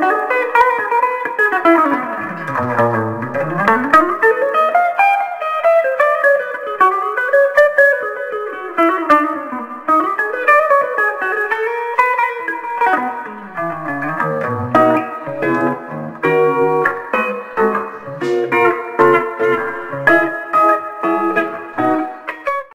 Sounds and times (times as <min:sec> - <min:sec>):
Electric guitar: 0:00.0 - 0:22.7
Strum: 0:02.1 - 0:04.3, 0:13.2 - 0:16.3.